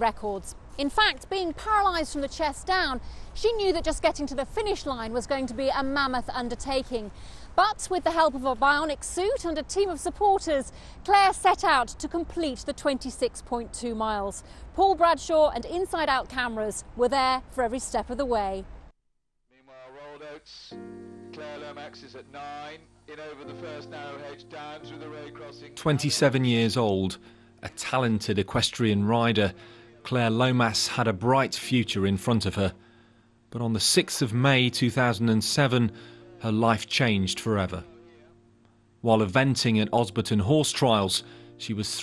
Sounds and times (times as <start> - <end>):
Speech: 0.0 - 18.6, 25.8 - 32.8, 33.6 - 37.9, 39.1 - 42.0
Music: 19.6 - 42.0.